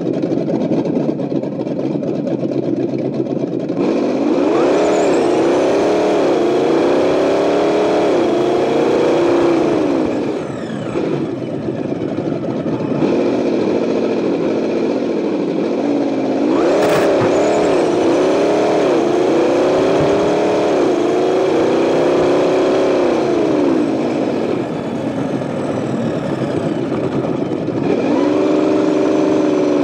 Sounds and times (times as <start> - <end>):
Race car, auto racing: 0.0 - 29.8.